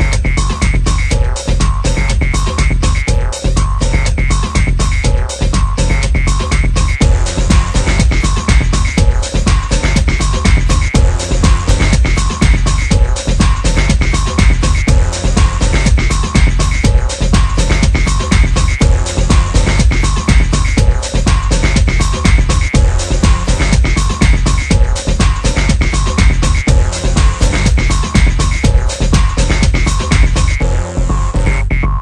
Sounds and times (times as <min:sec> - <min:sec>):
Soundtrack music: 0:00.0 - 0:32.0.